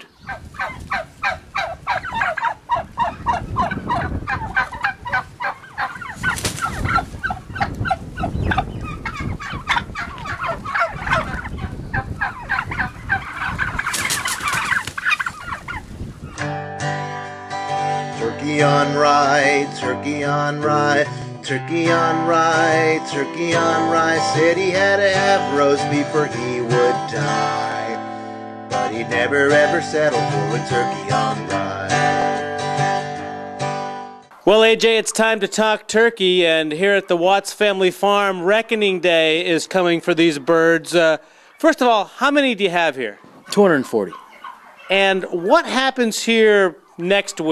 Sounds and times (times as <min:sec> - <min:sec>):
Turkey: 0:00.0 - 0:16.5, 0:38.9 - 0:41.9, 0:43.1 - 0:47.5.